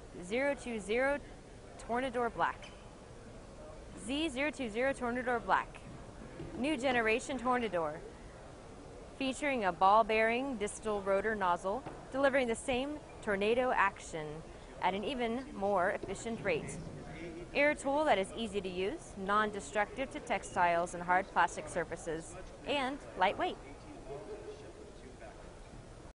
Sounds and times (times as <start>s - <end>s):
Speech: 0.2s - 1.2s, 1.8s - 2.7s, 3.5s - 5.8s, 6.6s - 8.0s, 9.2s - 25.6s.